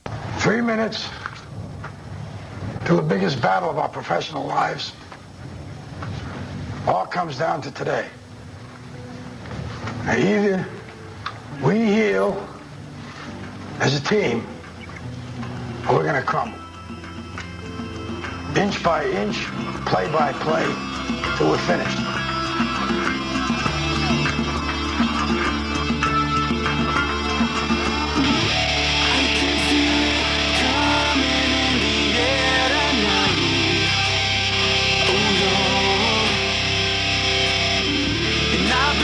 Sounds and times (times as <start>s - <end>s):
Outside, urban or manmade: 0.0s - 39.0s
Speech: 0.4s - 1.3s, 2.8s - 5.0s, 6.9s - 8.2s, 10.1s - 10.8s, 11.6s - 12.6s, 13.8s - 14.6s, 15.9s - 16.6s, 18.5s - 22.1s.